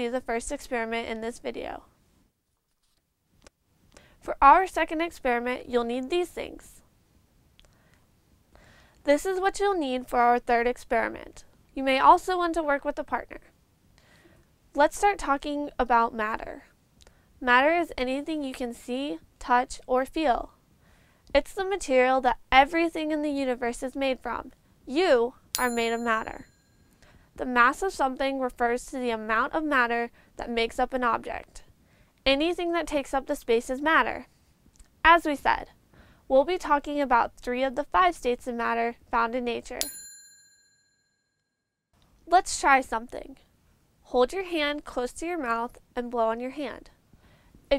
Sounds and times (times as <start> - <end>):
Speech: 0.0 - 1.9, 4.2 - 6.8, 9.0 - 13.5, 14.8 - 16.7, 17.4 - 20.5, 21.3 - 26.4, 27.4 - 31.7, 32.3 - 34.3, 35.0 - 39.8, 42.2 - 43.5, 44.1 - 47.0.